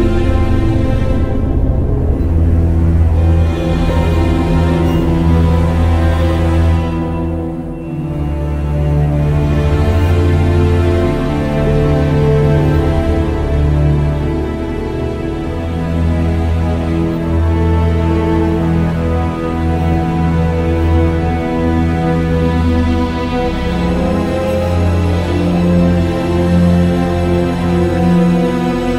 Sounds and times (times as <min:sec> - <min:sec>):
Music: 0:00.0 - 0:28.9.